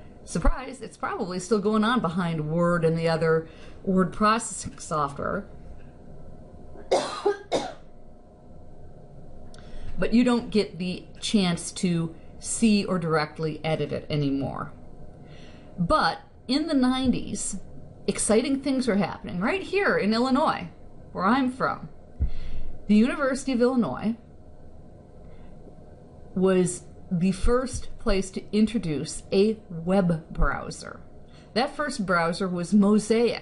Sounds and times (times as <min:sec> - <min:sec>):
Speech: 0:00.3 - 0:05.5, 0:10.0 - 0:14.8, 0:15.8 - 0:22.0, 0:22.9 - 0:24.2, 0:26.4 - 0:33.4.